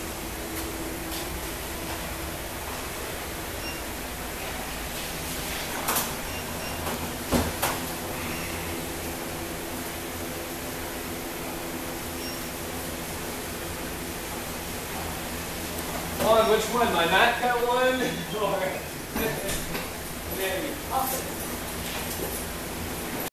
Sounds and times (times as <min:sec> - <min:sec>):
Speech: 0:16.2 - 0:19.6, 0:20.3 - 0:21.4.